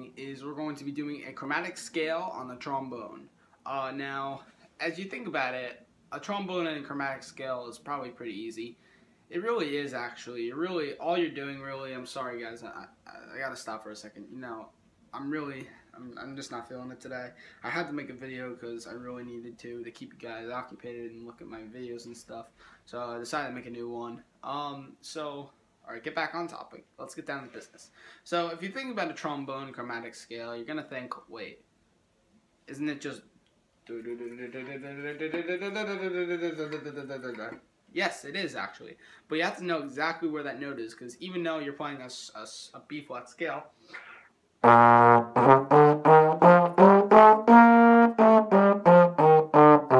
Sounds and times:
Speech: 0:00.0 - 0:31.7, 0:32.7 - 0:33.3, 0:33.9 - 0:43.7.

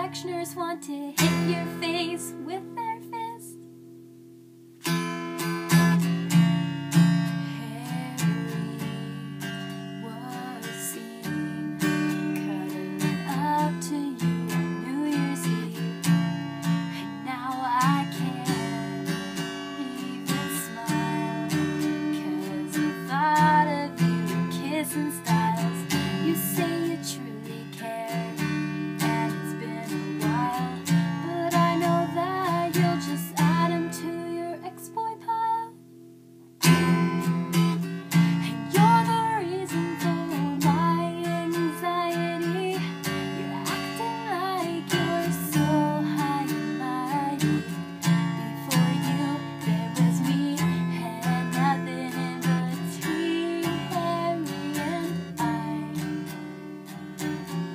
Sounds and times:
Guitar: 0:00.0 - 0:57.7.

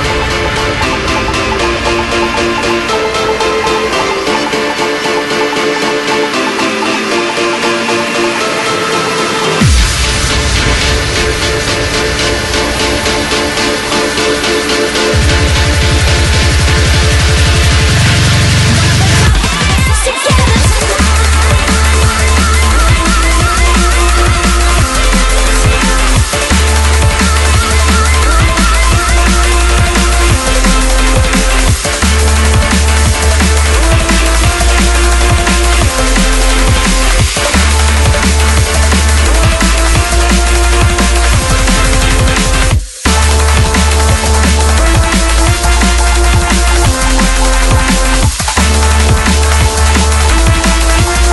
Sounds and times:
Music: 0:00.0 - 0:51.3.

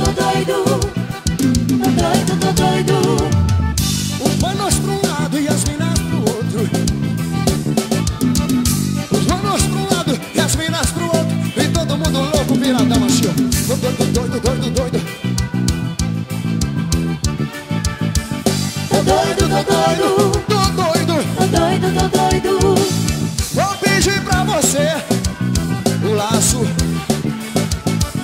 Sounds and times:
Salsa music: 0:00.0 - 0:28.2.

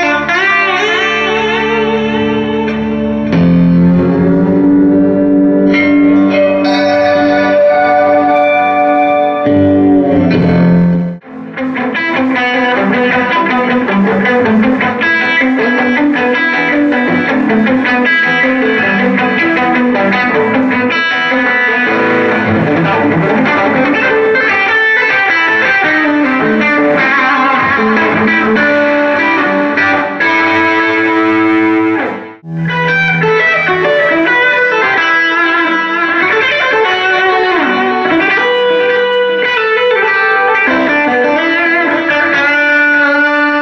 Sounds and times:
Music: 0:00.0 - 0:43.6.

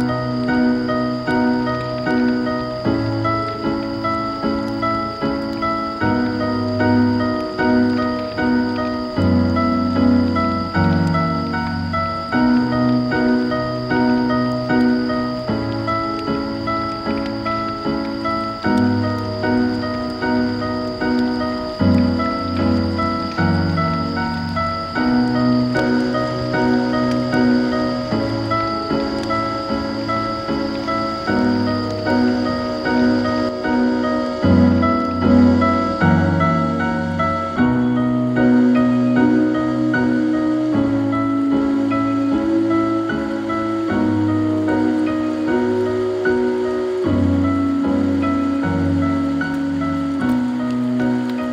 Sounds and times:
Music: 0:00.0 - 0:51.5.

